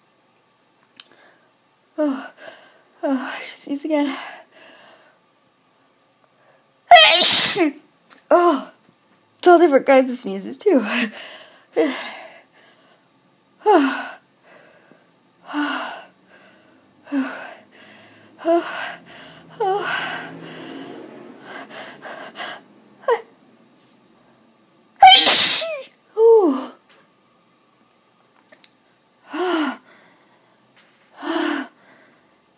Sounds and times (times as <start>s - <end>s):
Sneeze: 6.9s - 7.8s, 25.0s - 25.9s.